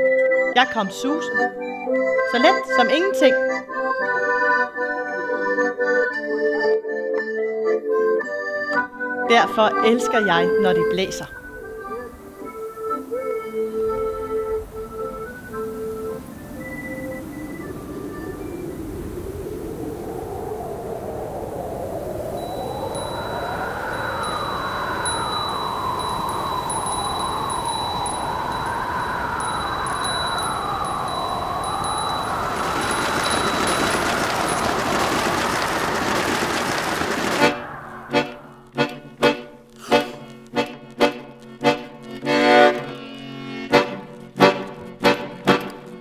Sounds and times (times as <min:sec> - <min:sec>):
Music: 0:00.0 - 0:19.8, 0:22.3 - 0:35.7, 0:36.7 - 0:46.0
Speech: 0:00.6 - 0:01.4, 0:02.3 - 0:03.4, 0:09.3 - 0:11.4
Wind noise (microphone): 0:13.9 - 0:36.1.